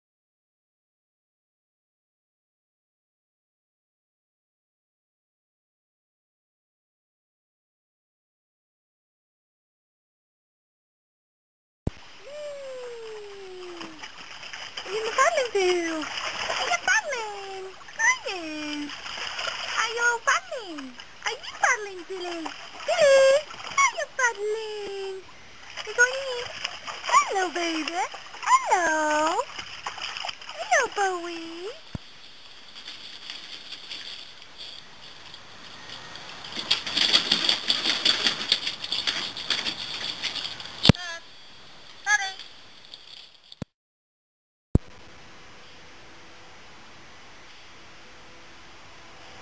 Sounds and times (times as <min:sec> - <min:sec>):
Speech: 0:12.2 - 0:14.0, 0:14.8 - 0:18.9, 0:19.8 - 0:29.5, 0:30.6 - 0:31.8, 0:40.9 - 0:41.2, 0:42.0 - 0:42.4.